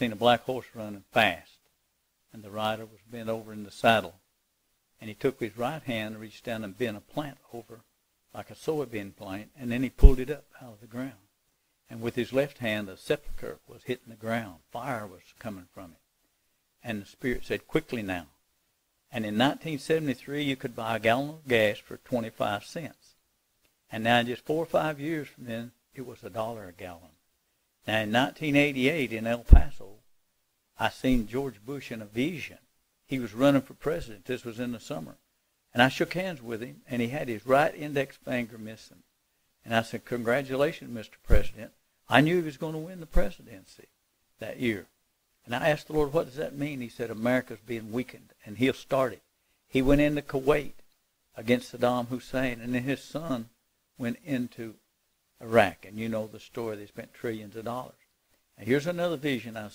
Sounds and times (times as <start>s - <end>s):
Speech: 0.0s - 1.7s, 2.3s - 4.2s, 5.0s - 11.3s, 11.9s - 16.0s, 16.8s - 18.4s, 19.1s - 23.2s, 23.9s - 27.2s, 27.8s - 30.0s, 30.8s - 50.8s, 51.4s - 54.8s, 55.4s - 59.7s.